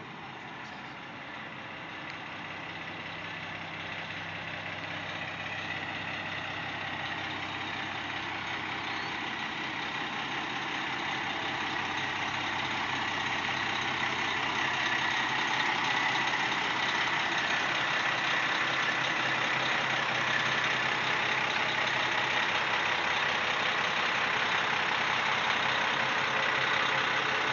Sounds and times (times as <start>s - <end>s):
Truck: 0.0s - 27.5s.